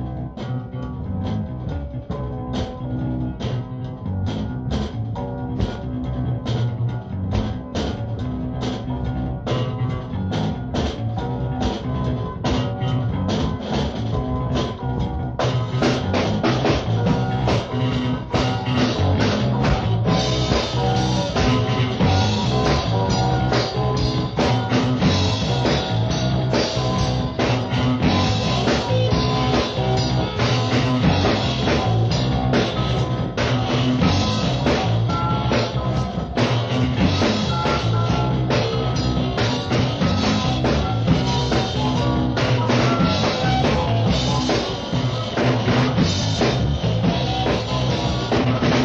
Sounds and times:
Music: 0.0 - 48.8.

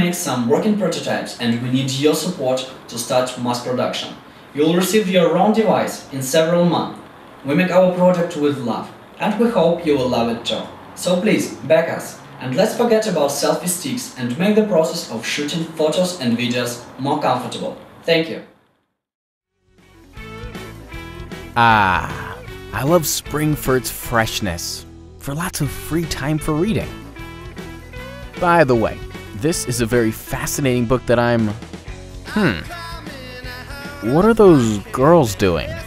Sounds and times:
Speech: 0.0 - 18.5, 21.6 - 27.0, 28.4 - 31.6, 32.3 - 32.8, 34.0 - 35.8
Music: 19.5 - 35.8.

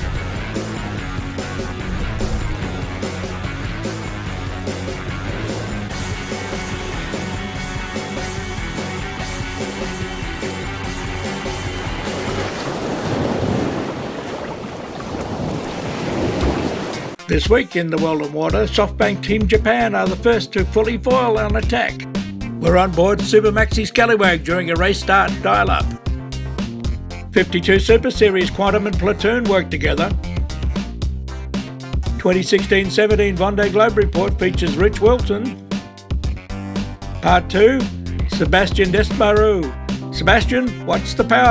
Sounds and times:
Music: 0.0 - 12.8, 16.9 - 41.5
Speech: 17.2 - 25.9, 27.4 - 30.2, 32.2 - 35.6, 37.2 - 41.5.

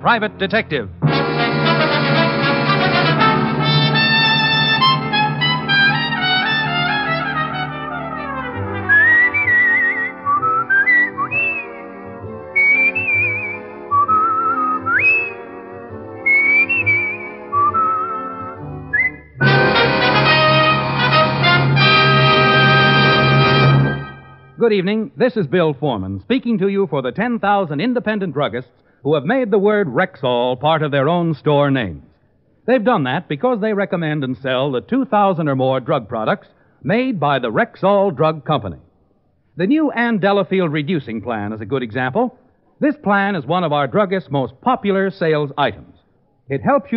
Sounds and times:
Speech: 0.0 - 1.0, 24.6 - 32.1, 32.7 - 38.9, 39.6 - 46.9
Music: 0.0 - 24.6.

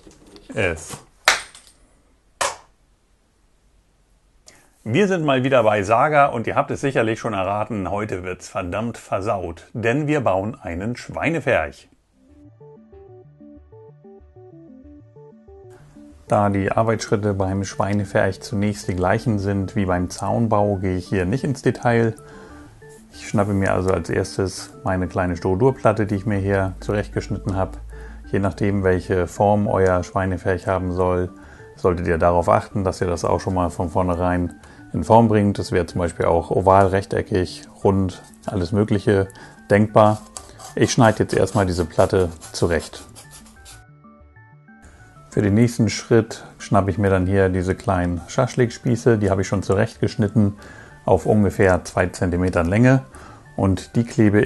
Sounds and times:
Speech: 0.4 - 1.1, 4.8 - 12.0, 16.3 - 22.2, 23.2 - 43.1, 45.4 - 54.4
Music: 4.9 - 54.4.

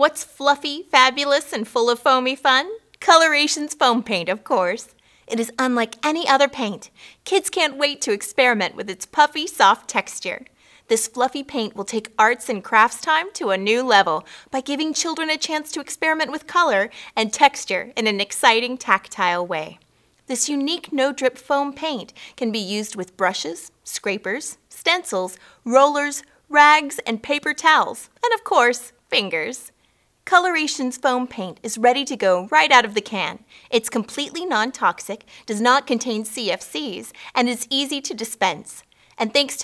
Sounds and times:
Speech: 0.0 - 29.7, 30.3 - 39.6.

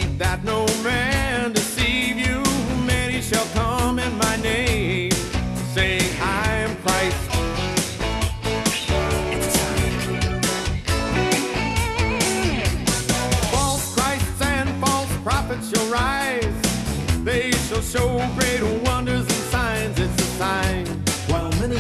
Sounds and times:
Pop music: 0.0 - 21.8.

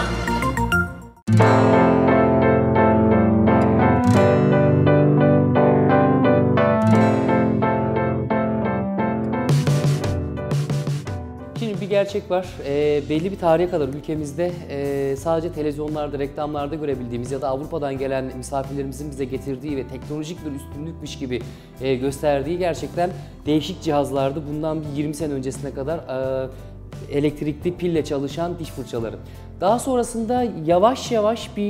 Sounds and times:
Music: 0.0 - 31.7
Speech: 11.6 - 31.7.

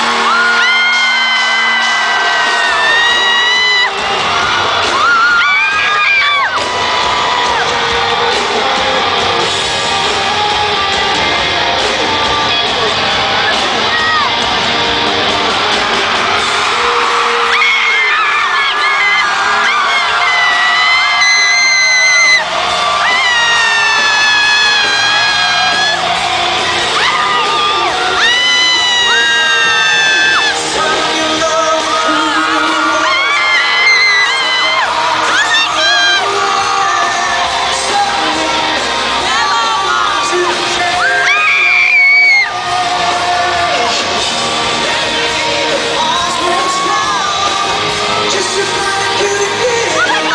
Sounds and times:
Music: 0.0 - 50.3.

